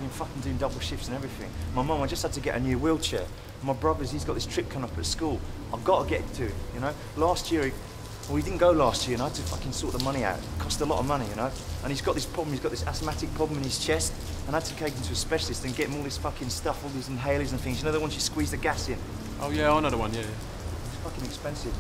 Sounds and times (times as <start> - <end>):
Speech: 0.0 - 20.4, 21.0 - 21.8.